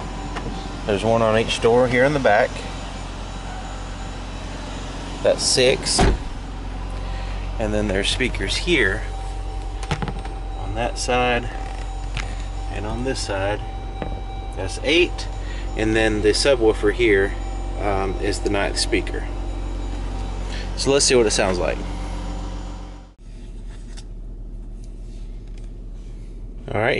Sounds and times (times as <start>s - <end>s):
Car: 0.0s - 26.9s.